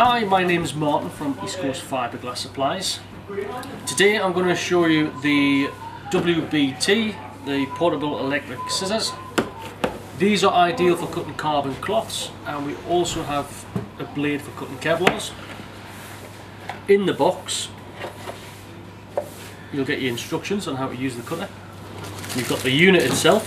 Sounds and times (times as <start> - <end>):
Speech: 0.0 - 9.4, 10.2 - 15.4, 16.9 - 17.8, 19.8 - 21.6, 22.3 - 23.4.